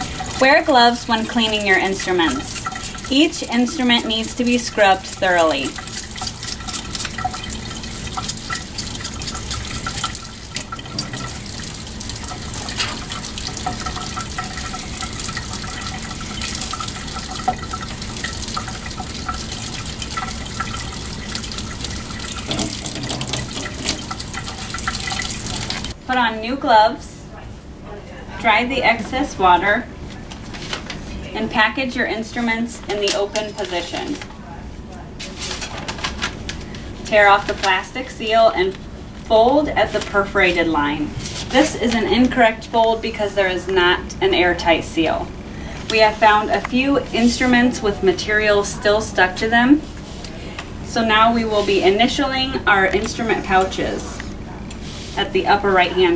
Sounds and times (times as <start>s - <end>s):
Sink (filling or washing): 0.0s - 26.0s, 37.1s - 43.7s, 44.3s - 50.2s, 50.9s - 56.1s
Water: 0.0s - 26.0s
Water tap, faucet: 0.0s - 26.0s.